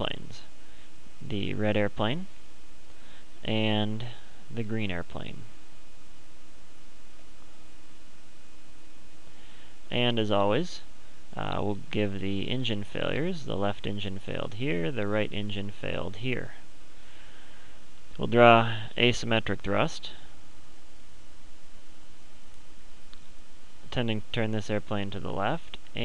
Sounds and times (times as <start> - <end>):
Speech: 0.0 - 0.5, 1.2 - 2.3, 3.4 - 5.5, 9.9 - 16.7, 18.2 - 20.3, 23.9 - 26.0.